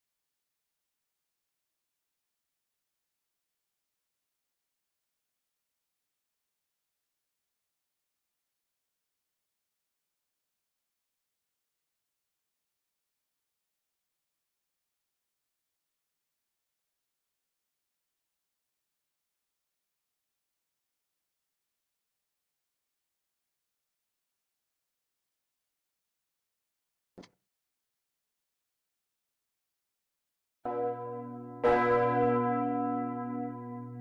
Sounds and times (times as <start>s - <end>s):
Church bell: 30.7s - 34.0s.